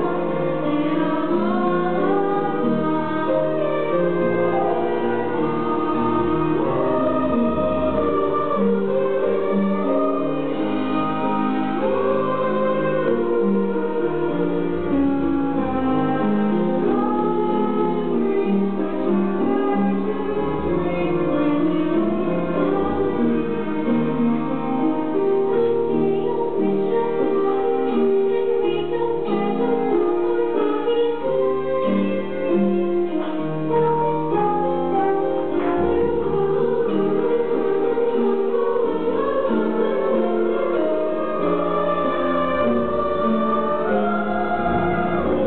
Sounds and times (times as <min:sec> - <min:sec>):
Female singing: 0:00.0 - 0:14.5, 0:25.8 - 0:32.9, 0:34.4 - 0:45.4
Music: 0:00.0 - 0:45.4.